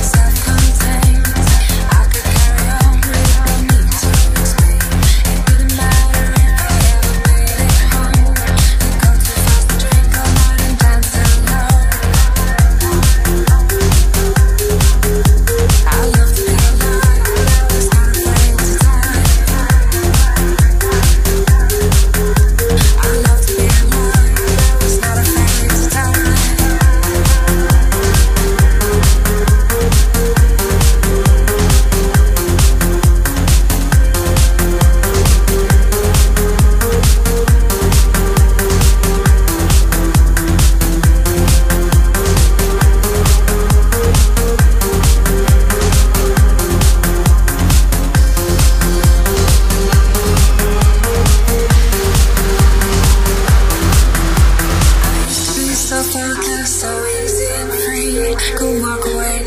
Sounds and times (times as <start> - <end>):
Dance music: 0.0 - 59.4.